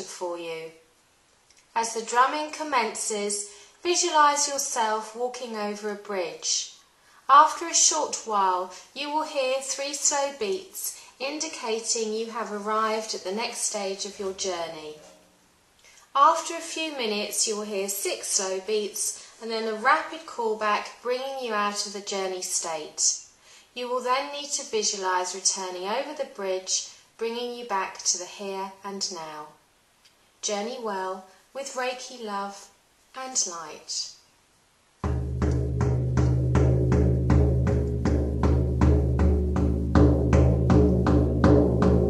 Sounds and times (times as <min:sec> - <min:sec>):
Speech: 0:00.0 - 0:00.8, 0:01.8 - 0:15.2, 0:16.1 - 0:23.2, 0:23.8 - 0:29.6, 0:30.4 - 0:34.2.